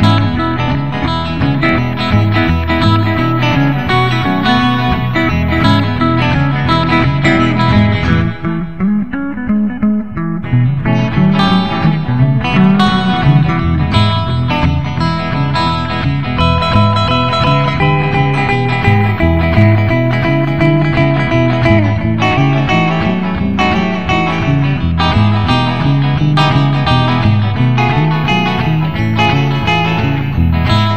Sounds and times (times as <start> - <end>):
Electric guitar: 0.0 - 30.9
Psychedelic rock: 0.0 - 30.9.